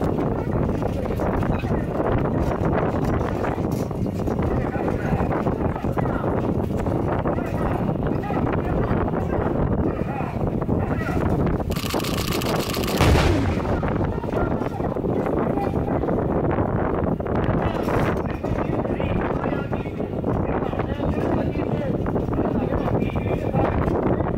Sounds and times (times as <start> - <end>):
Speech: 0.3 - 3.7, 4.4 - 6.5, 7.2 - 11.2, 13.6 - 16.3, 17.4 - 24.3
Artillery fire: 11.7 - 14.6.